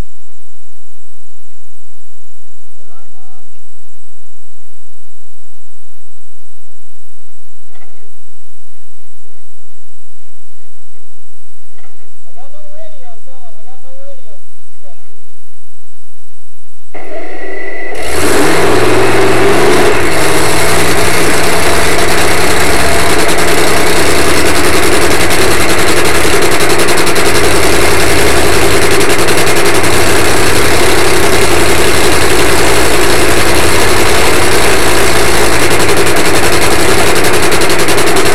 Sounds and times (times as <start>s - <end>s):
Vehicle: 17.0s - 38.3s.